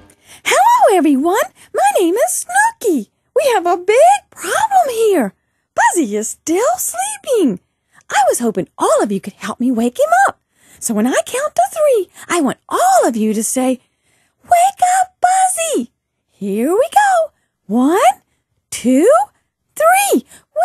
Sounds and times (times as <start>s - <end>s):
Speech: 0.4s - 13.8s, 14.4s - 20.6s.